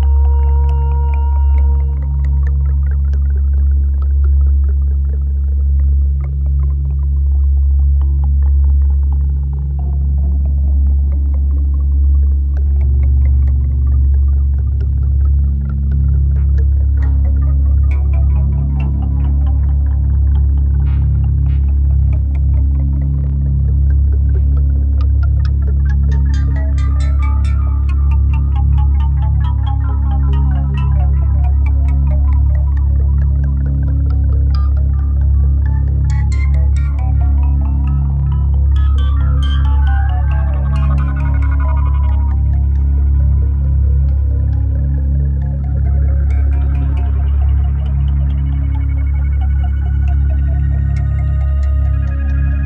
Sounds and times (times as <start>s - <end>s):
Music: 0.0s - 52.6s.